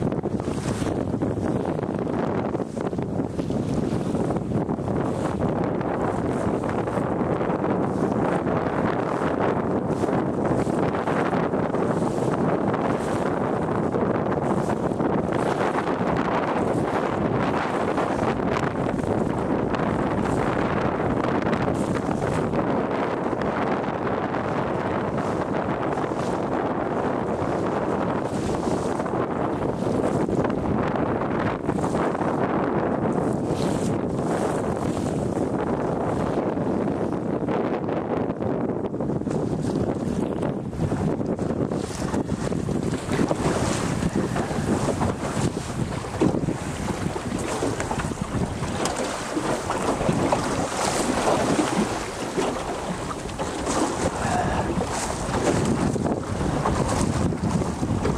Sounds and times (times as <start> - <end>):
Boat, Water vehicle: 0.0 - 58.1.